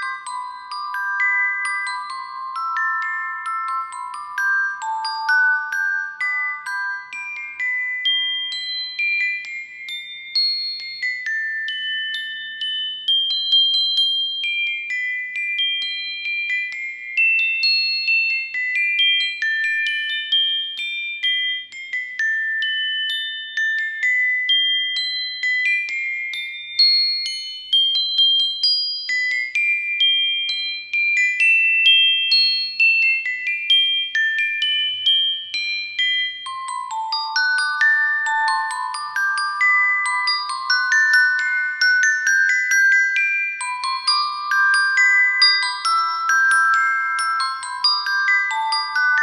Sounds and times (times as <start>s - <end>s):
Glockenspiel: 0.0s - 49.2s
Marimba, xylophone: 0.0s - 49.2s.